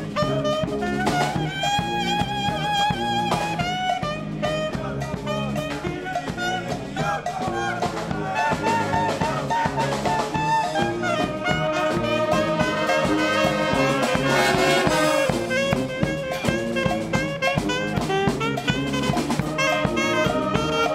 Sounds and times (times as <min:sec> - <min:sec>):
Brass instrument: 0:00.0 - 0:20.9
Saxophone: 0:00.0 - 0:20.9.